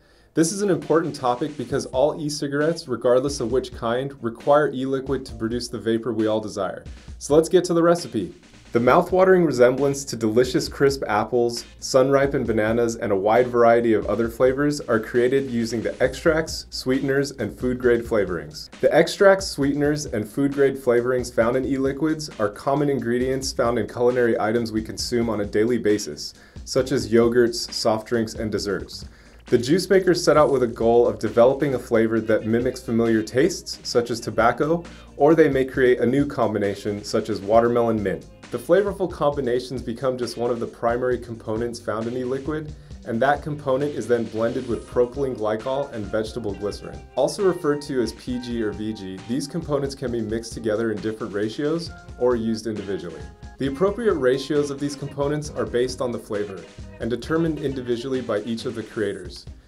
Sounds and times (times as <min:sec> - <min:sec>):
Music: 0:00.0 - 0:59.6
Speech: 0:00.4 - 0:59.5.